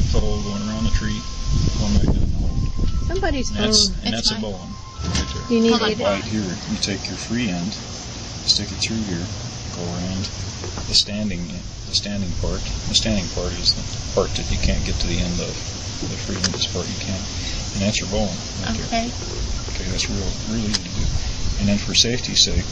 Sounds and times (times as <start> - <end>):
Speech: 0.0 - 1.2, 1.8 - 7.8, 8.5 - 10.3, 10.9 - 19.1, 19.7 - 22.7.